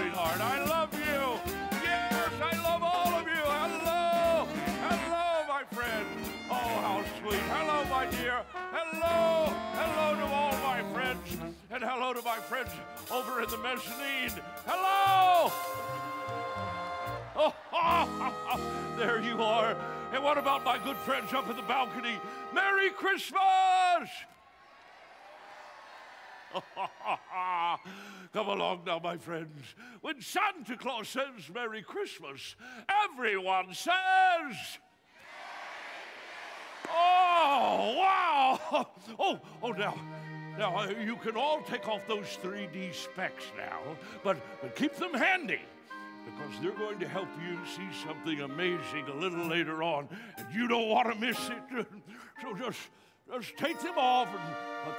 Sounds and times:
Speech: 0:00.0 - 0:15.6, 0:19.0 - 0:24.3, 0:28.4 - 0:34.8, 0:36.9 - 0:40.0, 0:40.6 - 0:45.6, 0:46.4 - 0:54.9
Music: 0:00.0 - 0:23.4, 0:39.3 - 0:54.9.

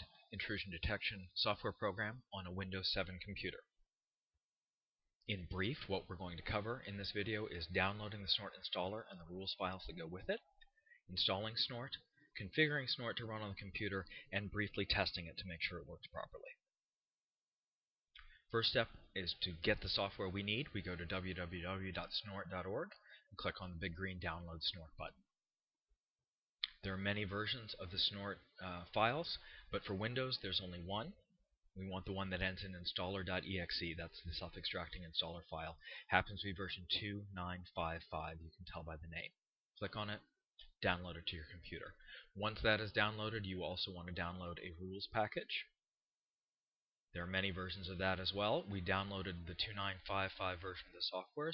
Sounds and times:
Speech: 0:00.0 - 0:03.8, 0:05.2 - 0:16.6, 0:18.5 - 0:25.2, 0:26.6 - 0:45.8, 0:47.1 - 0:51.5.

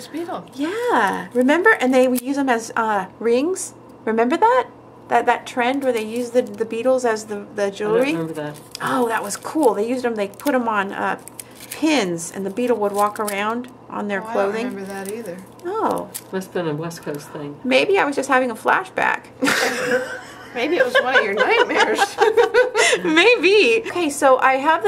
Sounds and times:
Inside, small room: 0:00.0 - 0:24.8
Snicker: 0:19.4 - 0:23.0.

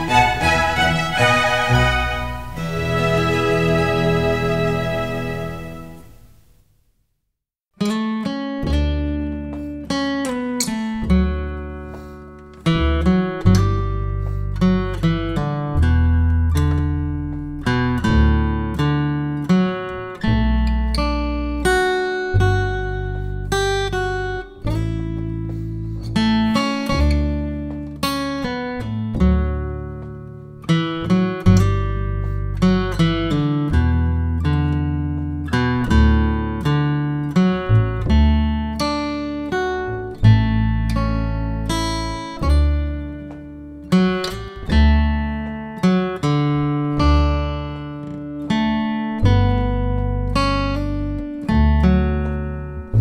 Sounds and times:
Guitar: 0:00.0 - 0:06.6, 0:07.8 - 0:53.0.

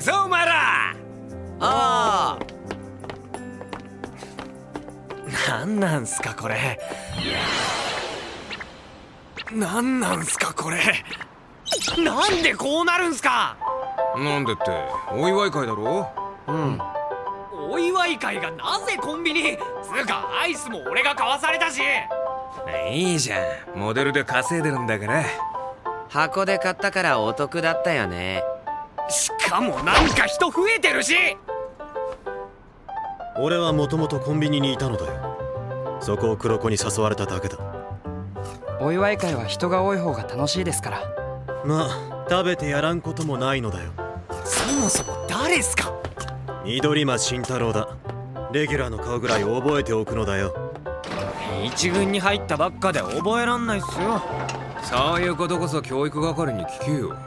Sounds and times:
Music: 0:00.0 - 0:08.9, 0:11.8 - 0:57.2.

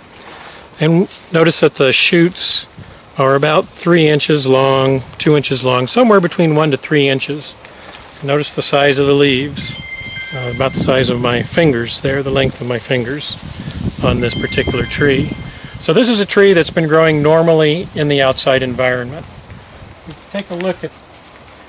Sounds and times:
Rustling leaves: 0:00.0 - 0:21.6
Speech: 0:00.8 - 0:07.6, 0:08.2 - 0:13.4, 0:14.0 - 0:19.3, 0:20.1 - 0:21.0.

